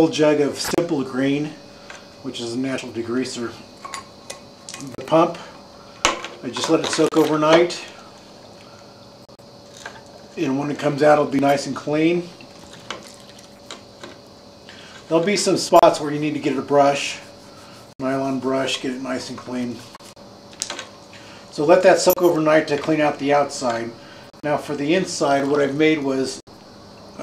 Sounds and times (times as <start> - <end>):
Speech: 0.0 - 1.6, 2.2 - 3.6, 4.8 - 5.5, 6.4 - 8.0, 10.4 - 12.4, 15.1 - 17.2, 18.0 - 19.8, 21.5 - 26.4.